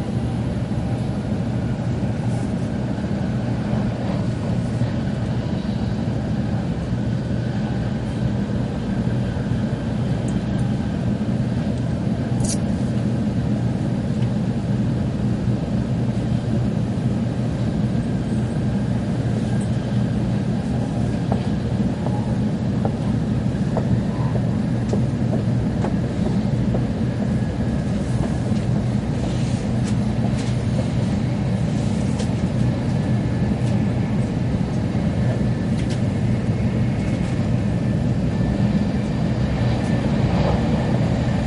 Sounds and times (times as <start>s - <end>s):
Train: 0.0s - 41.4s.